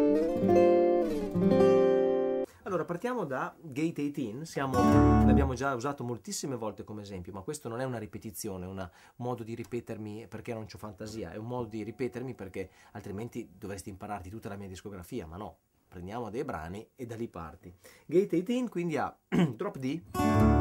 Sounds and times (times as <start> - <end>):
Acoustic guitar: 0.0 - 2.6, 4.7 - 5.6, 19.4 - 20.6
Speech: 2.6 - 20.1.